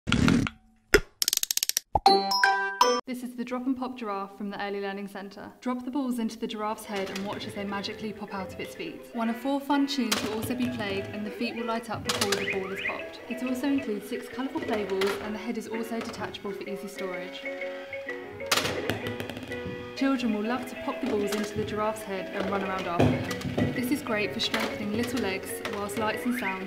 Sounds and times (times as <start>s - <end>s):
Speech: 3.1s - 17.4s, 20.0s - 23.2s, 23.8s - 26.6s
Music: 6.8s - 26.6s.